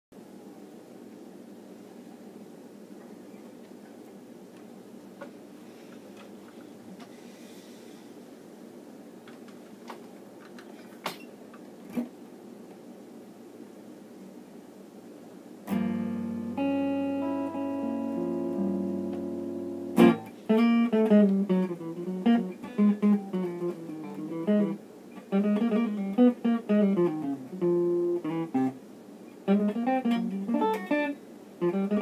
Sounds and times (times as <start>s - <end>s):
Inside, small room: 0.1s - 32.0s.